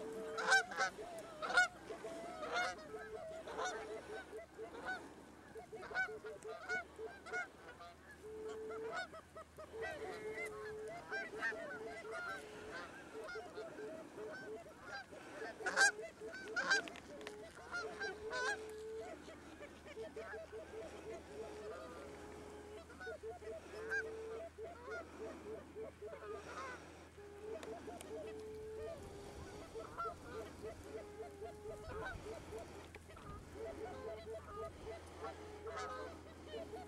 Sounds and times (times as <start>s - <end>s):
Honk: 0.0s - 36.8s.